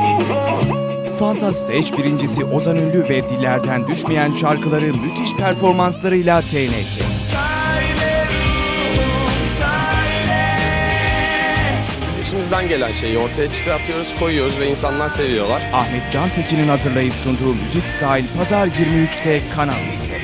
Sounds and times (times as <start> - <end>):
Rhythm and blues: 0.0 - 20.2
Speech: 1.1 - 7.4, 12.1 - 20.2.